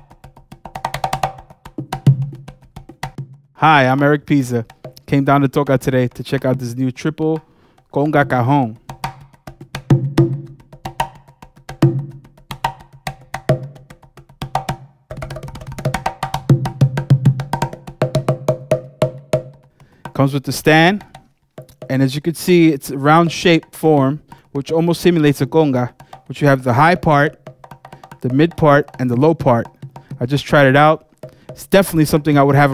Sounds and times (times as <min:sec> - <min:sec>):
Music: 0:00.0 - 0:32.7
Speech: 0:03.6 - 0:08.8, 0:20.2 - 0:21.0, 0:21.9 - 0:27.4, 0:28.2 - 0:31.0, 0:31.6 - 0:32.7.